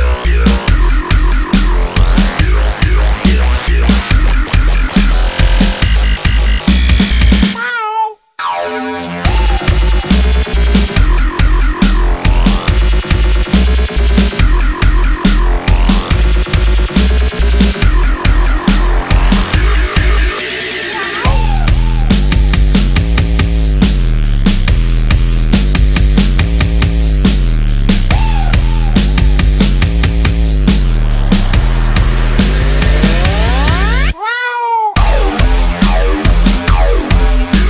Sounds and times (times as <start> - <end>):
Dubstep: 0.0 - 7.6, 8.4 - 34.2, 35.0 - 37.6.